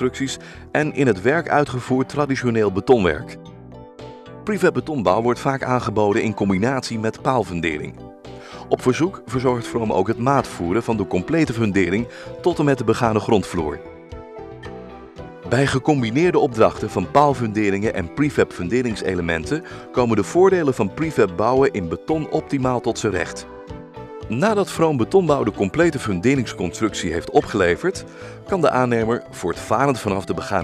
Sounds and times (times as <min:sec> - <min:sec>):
Speech: 0:00.0 - 0:03.4, 0:04.5 - 0:07.9, 0:08.6 - 0:13.8, 0:15.5 - 0:23.5, 0:24.3 - 0:30.6
Music: 0:00.0 - 0:30.6.